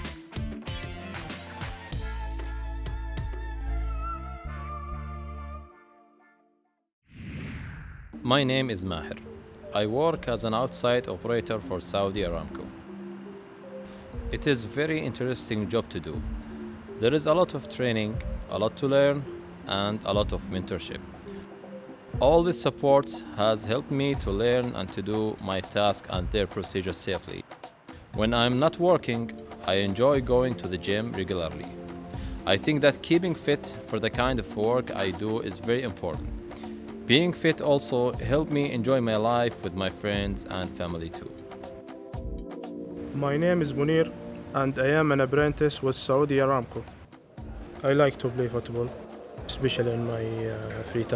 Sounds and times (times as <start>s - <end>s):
Music: 0.0s - 6.8s, 8.2s - 51.1s
Speech: 8.2s - 12.7s, 14.4s - 16.2s, 17.0s - 21.0s, 22.2s - 27.4s, 28.2s - 31.7s, 32.5s - 36.2s, 37.1s - 41.4s, 43.2s - 46.9s, 47.8s - 51.1s.